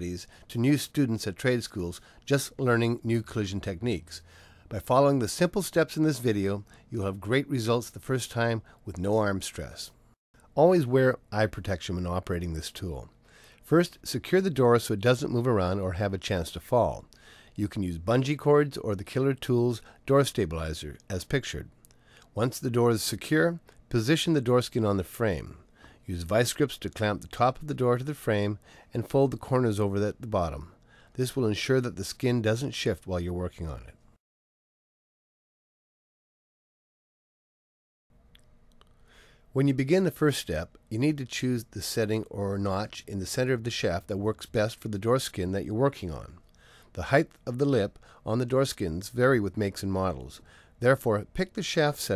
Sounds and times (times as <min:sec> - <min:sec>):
Speech: 0:00.0 - 0:10.0, 0:10.6 - 0:21.8, 0:22.4 - 0:34.0, 0:39.6 - 0:52.1.